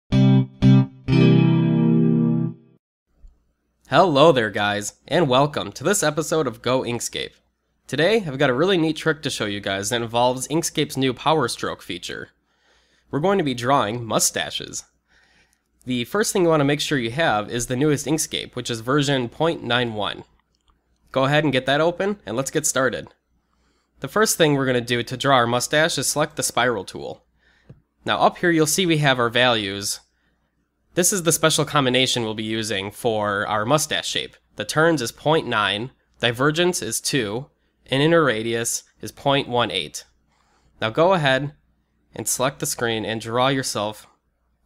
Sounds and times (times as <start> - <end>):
Effects unit: 0.1 - 2.8
Music: 0.1 - 2.8
Inside, small room: 0.1 - 44.6
Speech: 3.9 - 12.4, 13.1 - 14.9, 15.8 - 20.4, 21.1 - 23.2, 24.0 - 27.2, 28.0 - 30.1, 31.0 - 40.2, 40.8 - 44.2.